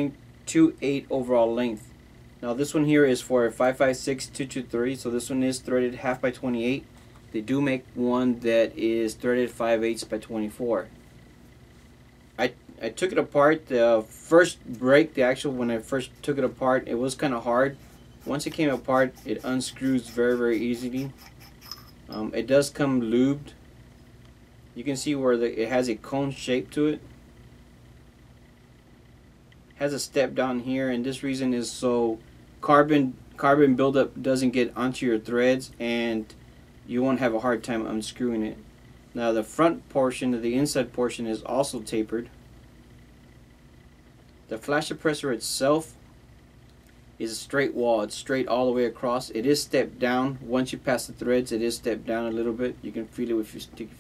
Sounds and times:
Speech: 0:00.0 - 0:10.9, 0:12.4 - 0:21.2, 0:22.1 - 0:23.6, 0:24.8 - 0:27.1, 0:29.8 - 0:38.6, 0:39.2 - 0:42.4, 0:44.5 - 0:46.0, 0:47.2 - 0:54.0.

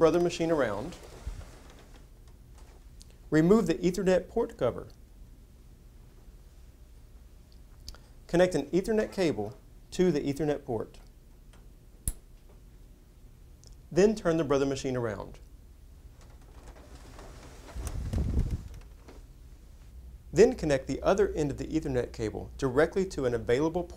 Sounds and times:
Speech: 0:00.0 - 0:01.0, 0:03.3 - 0:05.0, 0:08.3 - 0:11.1, 0:13.9 - 0:15.5, 0:20.4 - 0:23.9.

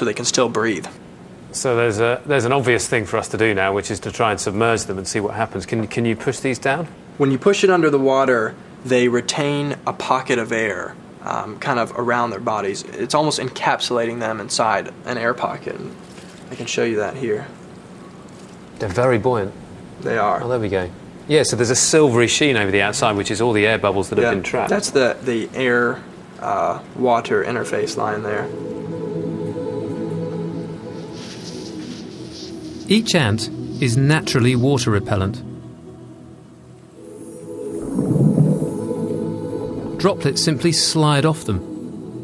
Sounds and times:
Speech: 0:00.0 - 0:01.0, 0:01.6 - 0:17.6, 0:18.8 - 0:28.5, 0:32.9 - 0:35.5, 0:40.0 - 0:41.6
Music: 0:27.2 - 0:42.2.

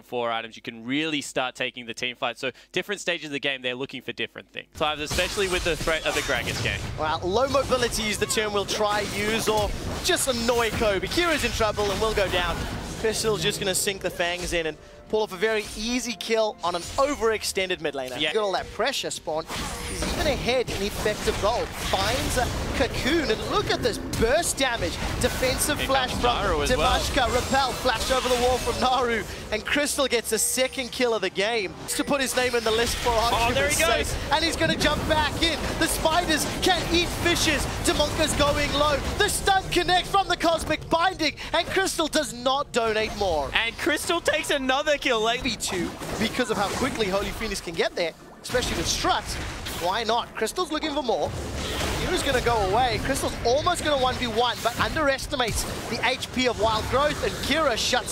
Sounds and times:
Speech: 0:00.0 - 0:51.3, 0:52.0 - 0:58.1.

